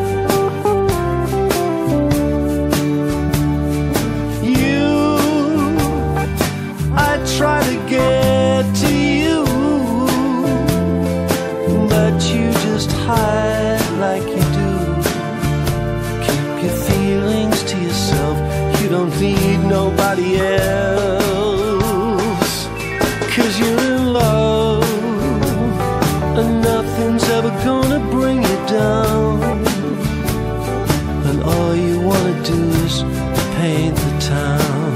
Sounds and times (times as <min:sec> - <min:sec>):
Music: 0:00.0 - 0:34.9
Singing: 0:16.3 - 0:25.8.